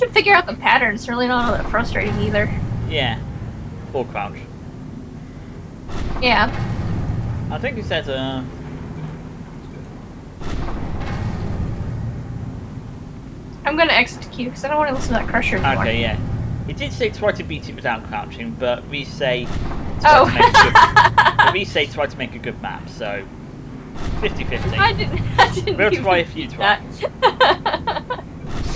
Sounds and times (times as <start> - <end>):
Speech: 0.0 - 3.2, 13.7 - 23.3, 24.2 - 28.7
Field recording: 0.0 - 28.7.